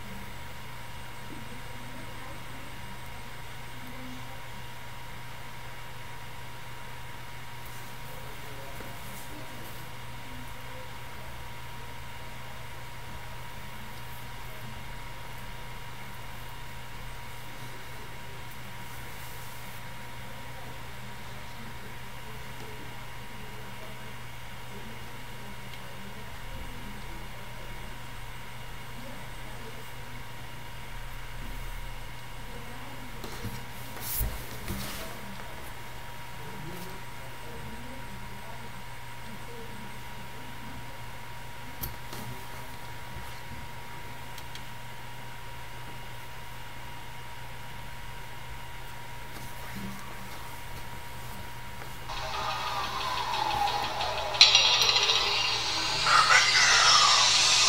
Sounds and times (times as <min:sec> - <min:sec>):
Speech: 0:00.0 - 0:05.3, 0:07.6 - 0:44.3, 0:52.1 - 0:57.6.